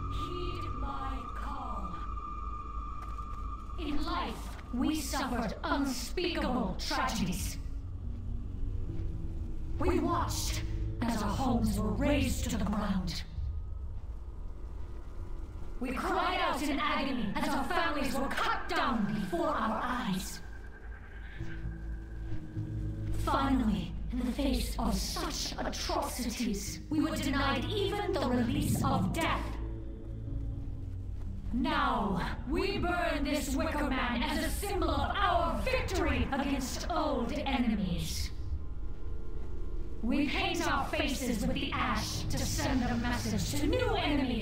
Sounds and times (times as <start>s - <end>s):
Female speech, woman speaking: 0.0s - 2.1s, 3.8s - 7.7s, 9.8s - 13.3s, 15.8s - 20.5s, 23.2s - 29.6s, 31.5s - 38.4s, 40.0s - 44.4s
Narration, monologue: 0.0s - 44.4s
Speech synthesizer: 3.8s - 7.6s, 9.8s - 13.3s, 15.8s - 20.4s, 23.2s - 29.6s, 31.6s - 38.3s, 40.0s - 44.4s.